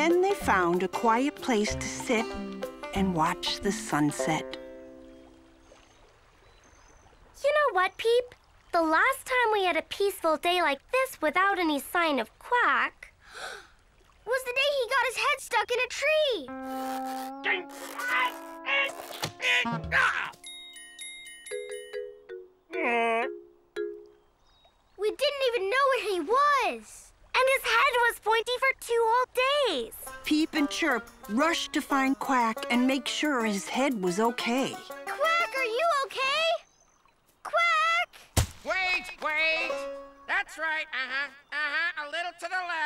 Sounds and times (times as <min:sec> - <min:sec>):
Speech: 0:00.0 - 0:04.5, 0:25.0 - 0:36.6
Music: 0:00.0 - 0:05.5, 0:16.5 - 0:24.1, 0:29.9 - 0:36.2, 0:39.4 - 0:40.3.